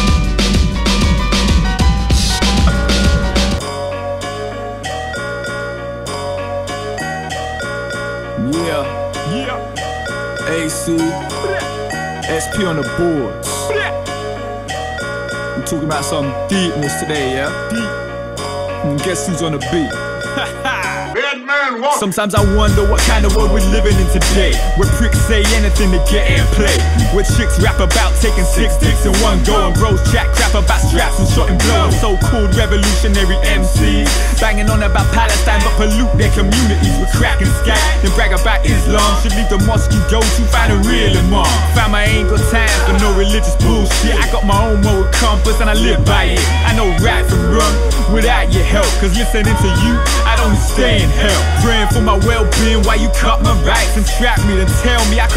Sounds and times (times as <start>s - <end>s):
Jingle (music): 0.0s - 55.3s.